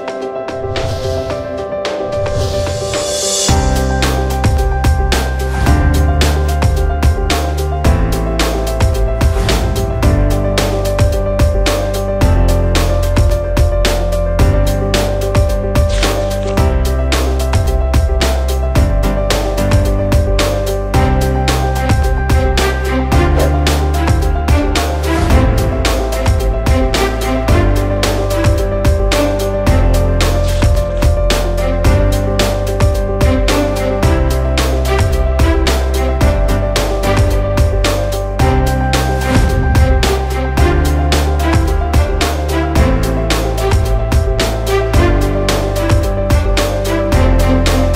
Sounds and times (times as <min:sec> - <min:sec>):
Music: 0:00.0 - 0:47.9.